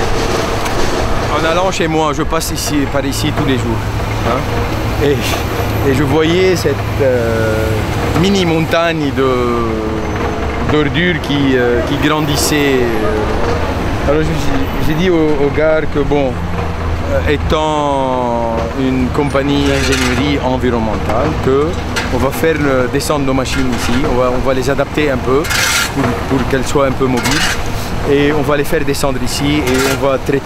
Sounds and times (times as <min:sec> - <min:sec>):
Speech: 0:01.3 - 0:13.4, 0:14.1 - 0:16.4, 0:17.0 - 0:30.4.